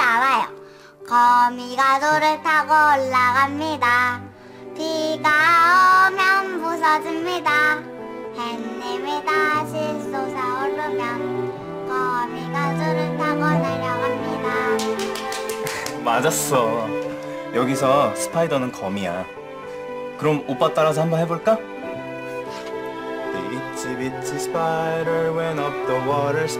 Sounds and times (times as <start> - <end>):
Child singing: 0.0 - 15.2
Music: 0.0 - 26.5
Speech: 16.0 - 16.9, 20.2 - 21.6.